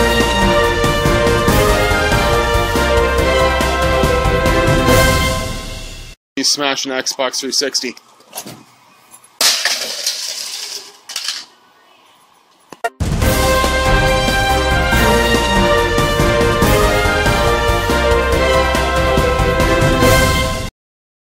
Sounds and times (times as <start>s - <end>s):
Music: 0.0s - 6.2s, 12.9s - 20.7s.